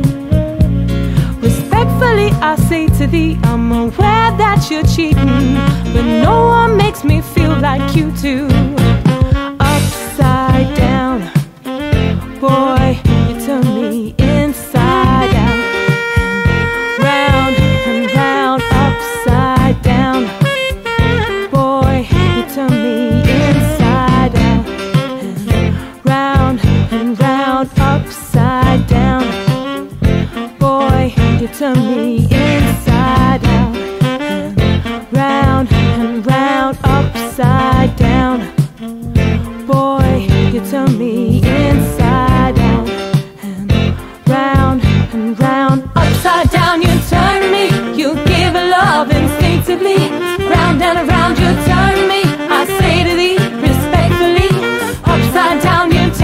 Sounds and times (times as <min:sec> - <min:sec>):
Musical instrument: 0:00.0 - 0:28.2, 0:28.9 - 0:56.2.